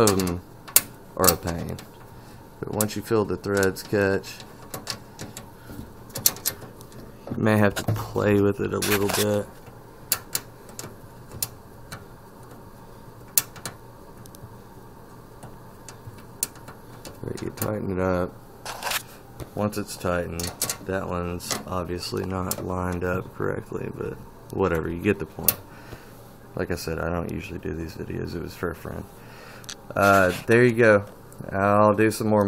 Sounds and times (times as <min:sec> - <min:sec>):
Speech: 0:00.0 - 0:00.4, 0:01.2 - 0:01.8, 0:02.6 - 0:04.5, 0:07.3 - 0:09.5, 0:17.2 - 0:18.4, 0:19.6 - 0:25.6, 0:26.6 - 0:29.1, 0:29.9 - 0:32.4
Inside, small room: 0:00.0 - 0:32.4.